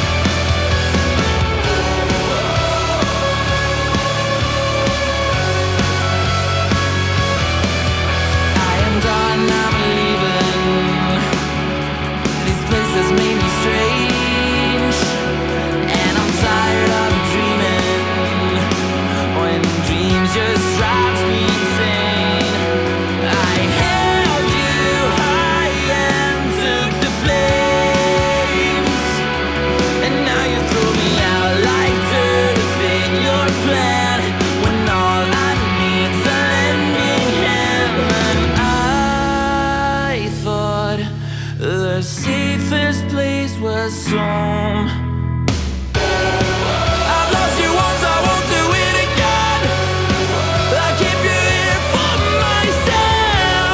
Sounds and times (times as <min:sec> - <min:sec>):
Rhythm and blues: 0:00.0 - 0:41.1, 0:44.1 - 0:53.7.